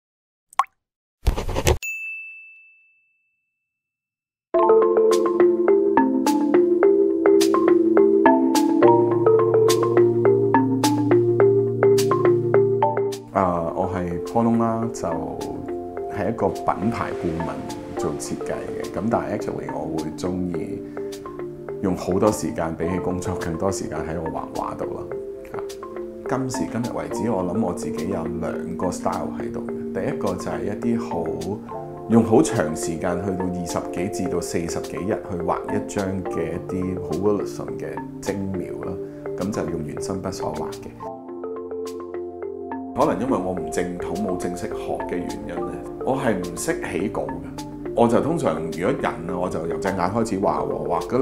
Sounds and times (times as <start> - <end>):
Music: 4.5 - 51.2.